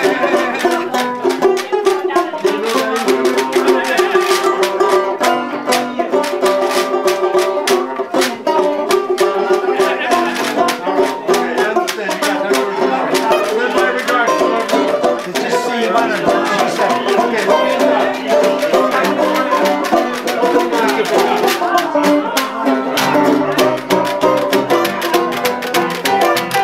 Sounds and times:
Speech: 0:00.0 - 0:25.1
Happy music: 0:00.0 - 0:26.6.

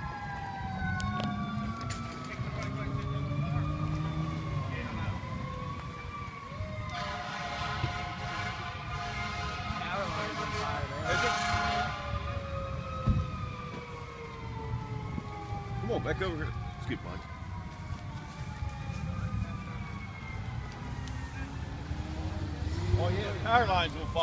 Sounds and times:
Fire engine, fire truck (siren): 0:00.0 - 0:24.2
Accelerating, revving, vroom: 0:02.3 - 0:04.7, 0:20.8 - 0:23.5.

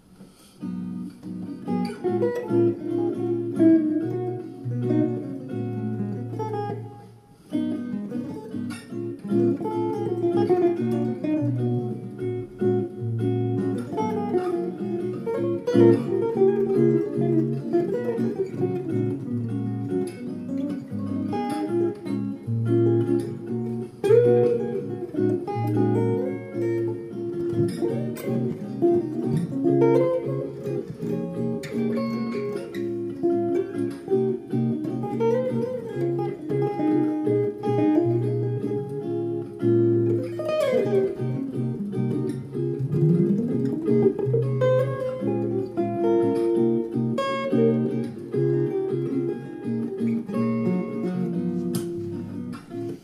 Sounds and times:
Guitar: 0:00.0 - 0:53.0.

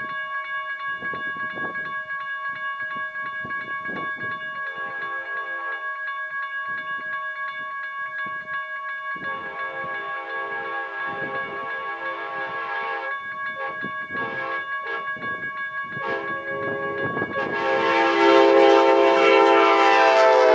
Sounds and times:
Steam whistle: 0:09.6 - 0:15.2, 0:16.0 - 0:20.5.

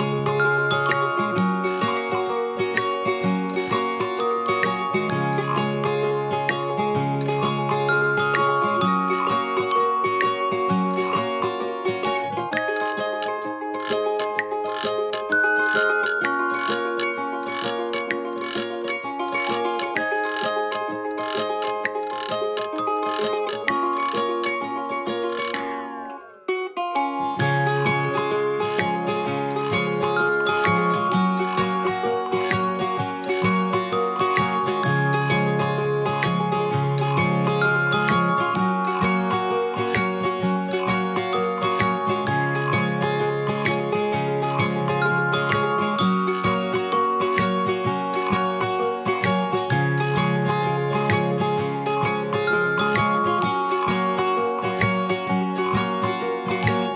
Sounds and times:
Music: 0:00.0 - 0:56.9.

